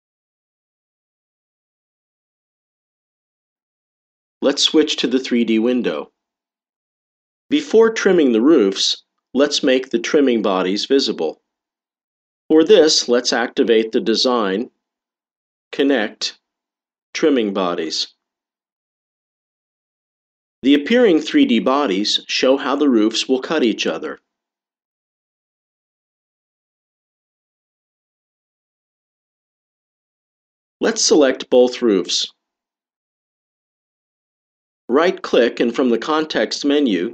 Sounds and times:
Speech: 0:04.4 - 0:06.2, 0:07.5 - 0:11.4, 0:12.5 - 0:14.8, 0:15.7 - 0:16.4, 0:17.2 - 0:18.2, 0:20.6 - 0:24.2, 0:30.8 - 0:32.4, 0:34.9 - 0:37.1.

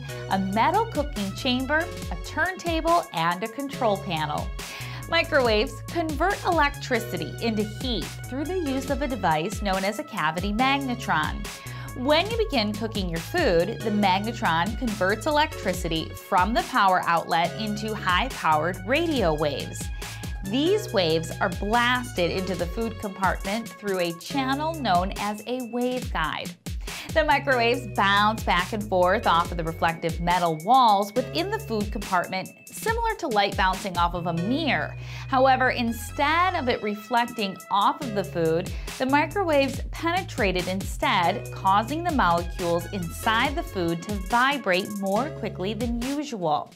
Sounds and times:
Music: 0:00.0 - 0:46.7
Speech: 0:00.3 - 0:46.7.

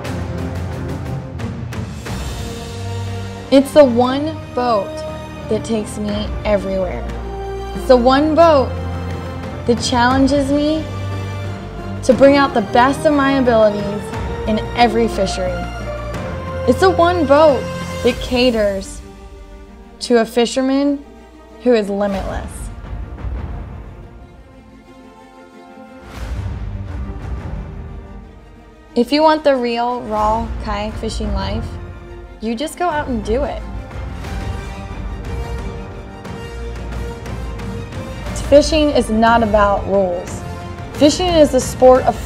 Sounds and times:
Music: 0:00.0 - 0:42.2
Speech: 0:03.5 - 0:07.1, 0:07.8 - 0:08.7, 0:09.7 - 0:10.9, 0:12.1 - 0:15.7, 0:16.7 - 0:19.0, 0:20.0 - 0:21.0, 0:21.6 - 0:22.7, 0:29.0 - 0:31.7, 0:32.4 - 0:33.6, 0:38.4 - 0:40.4, 0:41.0 - 0:42.2.

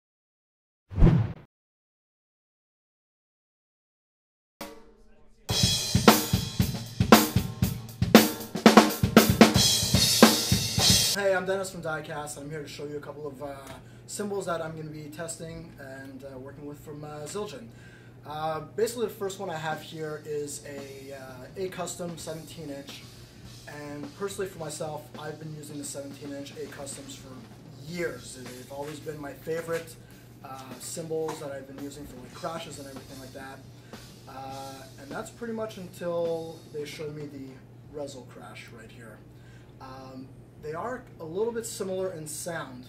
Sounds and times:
Cymbal: 0:04.6 - 0:11.2, 0:18.8 - 0:37.6
Drum kit: 0:04.6 - 0:11.4, 0:18.8 - 0:38.1.

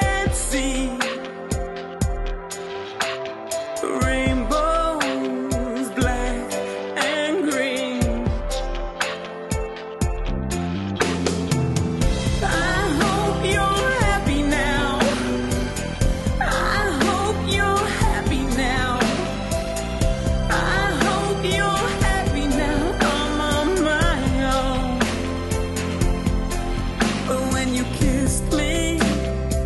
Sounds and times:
Music: 0:00.0 - 0:29.6.

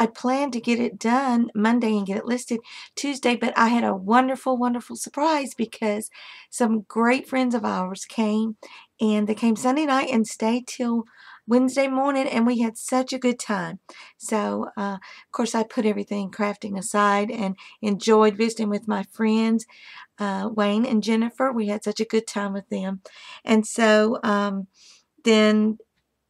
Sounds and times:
Speech: 0:00.0 - 0:25.8.

